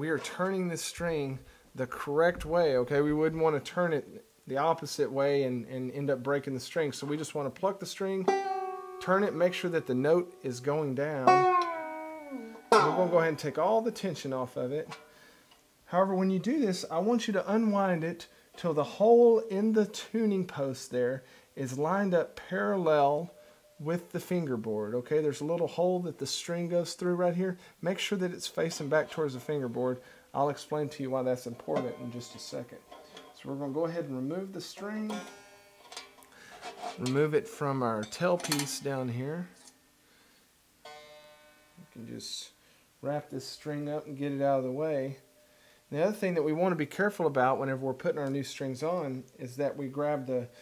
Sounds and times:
Speech: 0:00.0 - 0:08.3, 0:09.0 - 0:11.4, 0:12.8 - 0:15.0, 0:15.9 - 0:35.3, 0:37.0 - 0:39.6, 0:41.9 - 0:45.2, 0:45.9 - 0:50.6
Inside, small room: 0:00.0 - 0:50.6
Guitar: 0:06.3 - 0:15.4, 0:25.2 - 0:39.8
Banjo: 0:07.0 - 0:15.3, 0:28.6 - 0:39.7, 0:40.8 - 0:42.5.

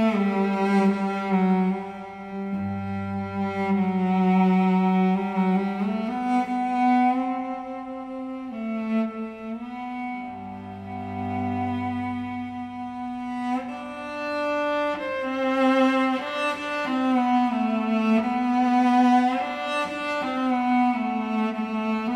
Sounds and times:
Violin, fiddle: 0:00.0 - 0:22.1.

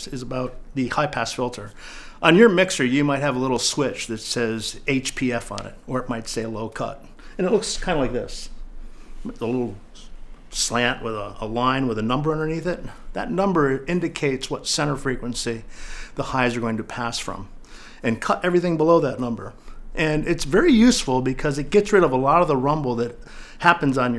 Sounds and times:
Speech: 0:00.0 - 0:08.6, 0:09.2 - 0:24.1.

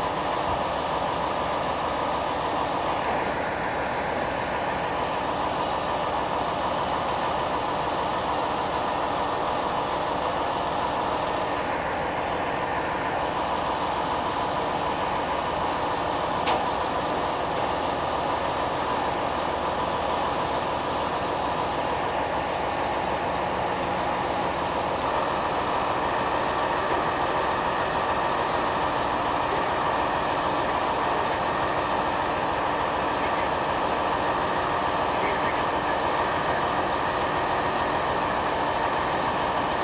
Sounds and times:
Speech: 0:33.0 - 0:33.7, 0:35.0 - 0:36.9.

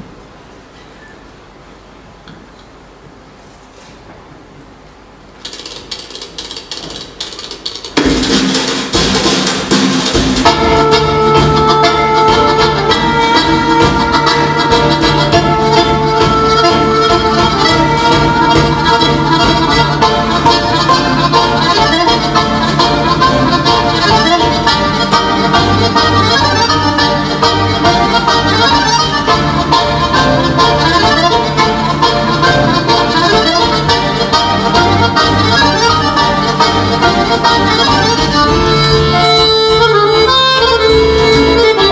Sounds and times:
Inside, large room or hall: 0:00.0 - 0:41.9
Accordion: 0:07.2 - 0:41.9.

